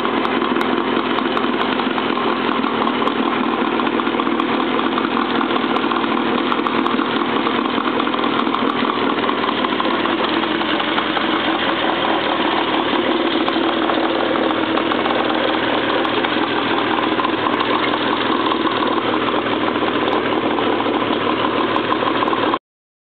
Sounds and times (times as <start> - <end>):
Motorboat, speedboat: 0.0 - 22.6.